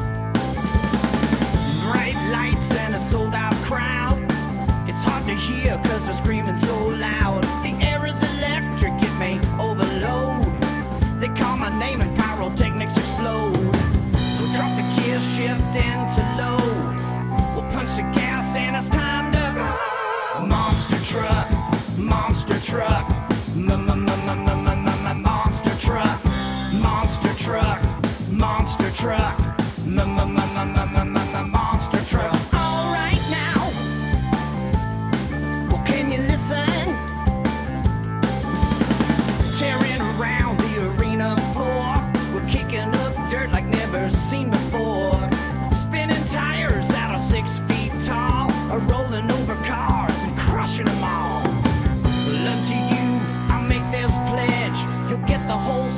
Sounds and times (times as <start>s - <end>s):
Music: 0.0s - 55.9s.